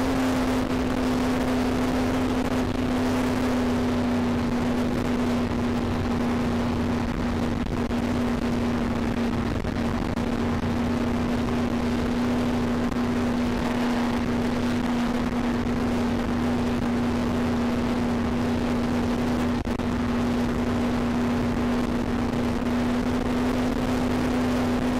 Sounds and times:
Vehicle: 0:00.0 - 0:24.9.

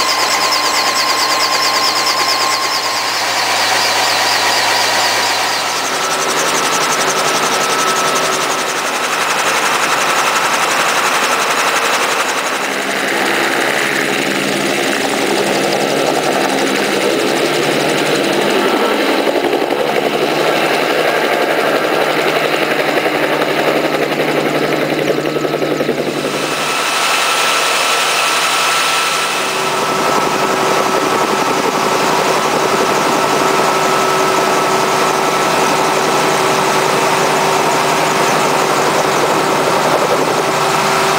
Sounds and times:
Engine: 0:00.0 - 0:41.1
Helicopter: 0:00.0 - 0:41.1.

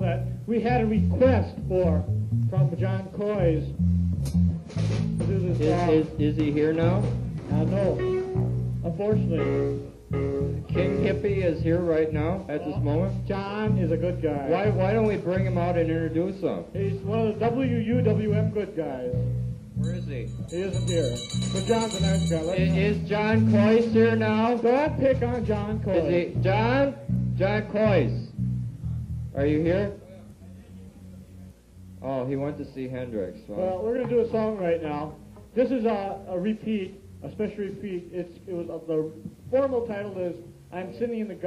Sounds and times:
Speech: 0:00.0 - 0:03.8, 0:05.2 - 0:09.8, 0:10.6 - 0:28.3, 0:29.4 - 0:41.4
Music: 0:00.0 - 0:41.4.

